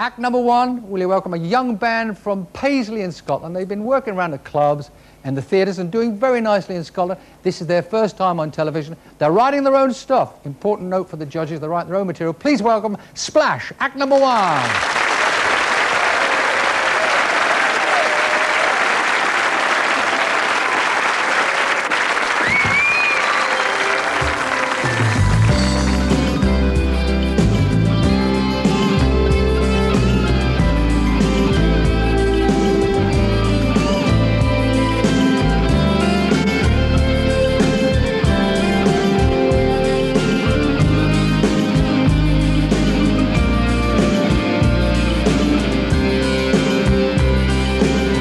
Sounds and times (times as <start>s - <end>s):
Speech: 0.0s - 14.8s.